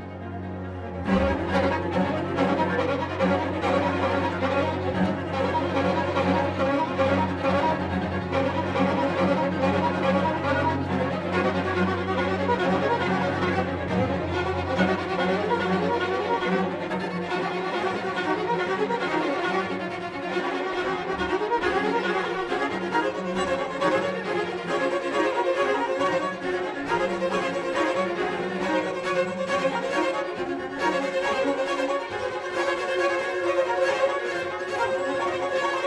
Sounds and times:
String section: 0.0 - 35.8.

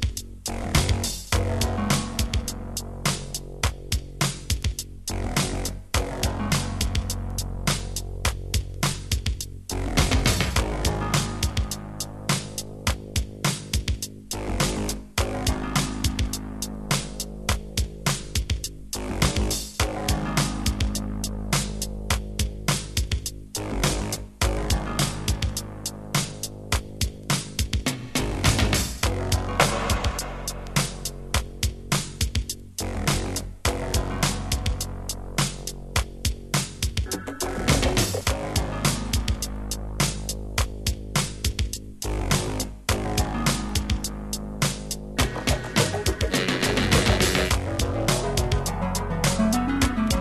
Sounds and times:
Music: 0.0 - 50.2.

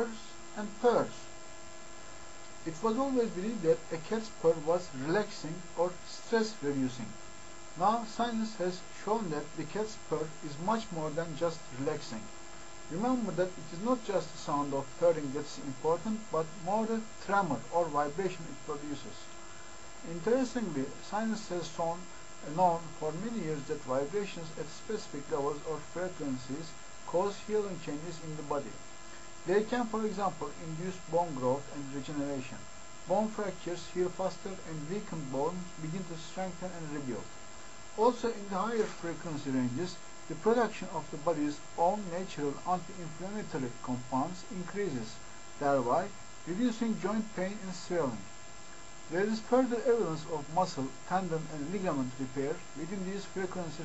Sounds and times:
Narration, monologue: 0.0 - 53.8.

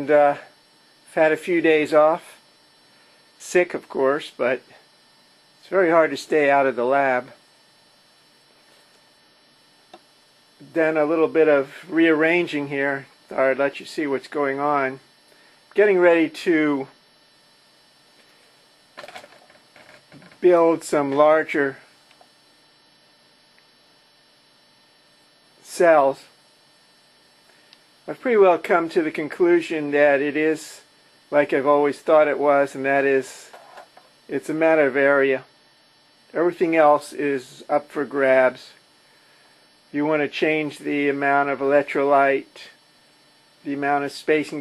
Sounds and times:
Speech: 0.0 - 0.5, 1.1 - 2.4, 3.4 - 4.8, 5.6 - 7.4, 10.6 - 15.0, 15.8 - 17.0, 20.4 - 21.9, 25.6 - 26.4, 28.1 - 33.5, 34.3 - 35.5, 36.3 - 38.8, 39.9 - 42.8, 43.6 - 44.6.

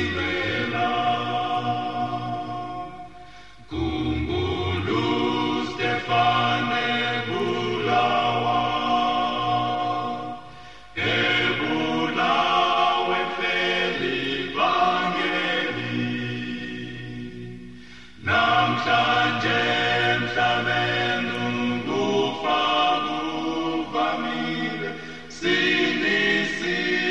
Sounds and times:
Chant: 0.0 - 27.1.

